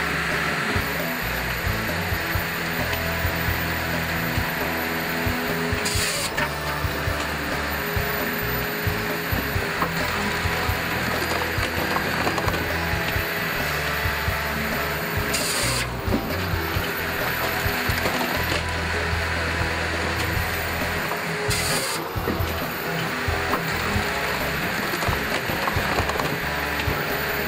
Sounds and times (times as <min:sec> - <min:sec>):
Music: 0:00.0 - 0:27.4.